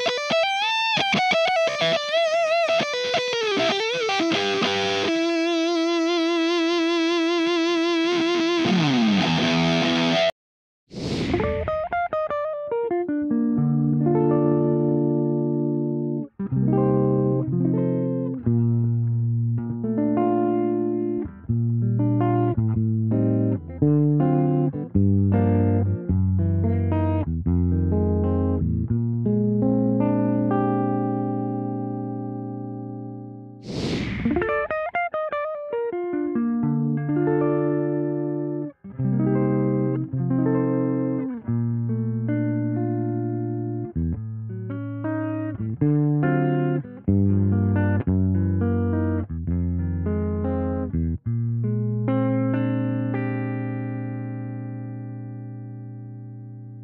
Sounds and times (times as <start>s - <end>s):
Electric guitar: 0.0s - 56.8s.